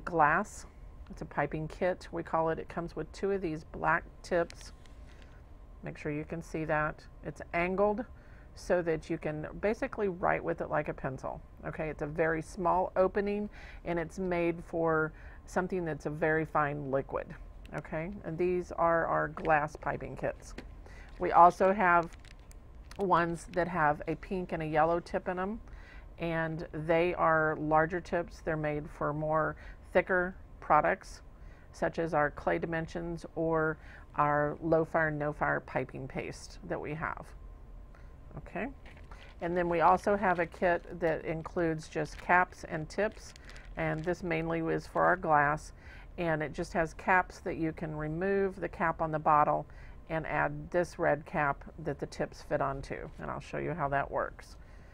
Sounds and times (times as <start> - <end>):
Speech: 0.0 - 4.7, 5.8 - 20.6, 21.2 - 22.2, 22.9 - 25.6, 26.2 - 31.2, 31.8 - 37.3, 38.3 - 38.8, 39.4 - 54.6.